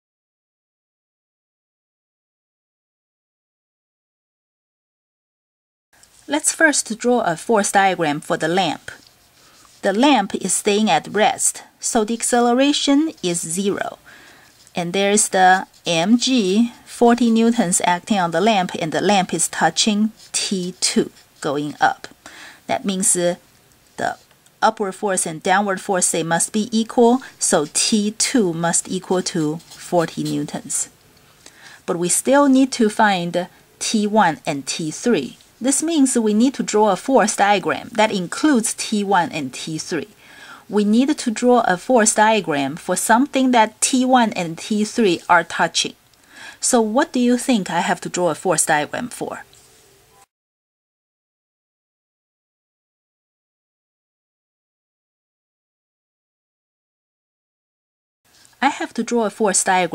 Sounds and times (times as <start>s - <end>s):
Speech: 6.3s - 9.0s, 9.8s - 14.0s, 14.8s - 23.4s, 24.0s - 30.9s, 31.9s - 46.0s, 46.6s - 49.5s, 58.6s - 59.9s.